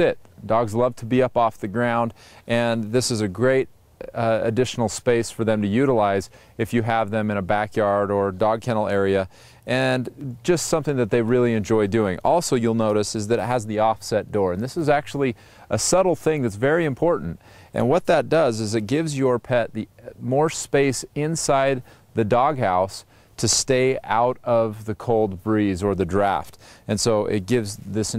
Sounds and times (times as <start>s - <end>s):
Speech: 0.0s - 28.1s.